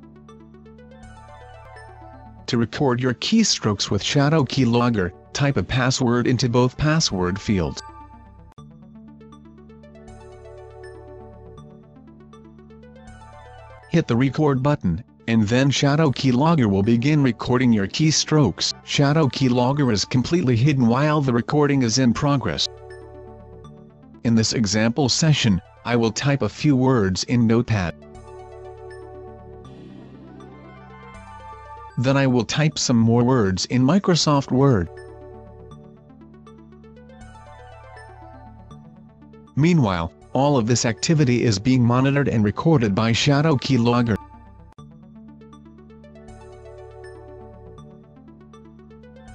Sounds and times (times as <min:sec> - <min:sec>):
Music: 0:00.0 - 0:49.3
Speech: 0:02.5 - 0:07.8, 0:14.0 - 0:22.7, 0:24.3 - 0:28.0, 0:32.0 - 0:34.9, 0:39.6 - 0:44.2.